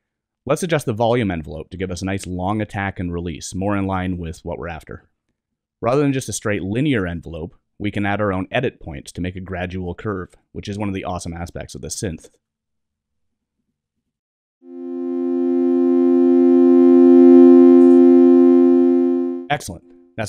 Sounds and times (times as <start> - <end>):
Speech: 0.5 - 5.1, 5.8 - 12.4, 19.5 - 20.2
Synthesizer: 14.7 - 19.5.